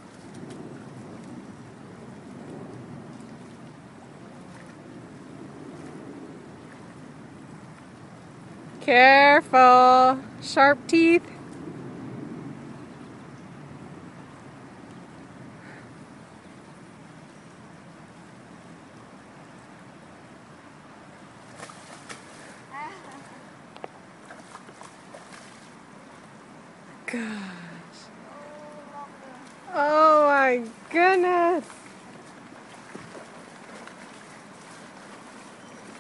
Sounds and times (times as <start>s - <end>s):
Stream: 0.0s - 36.0s.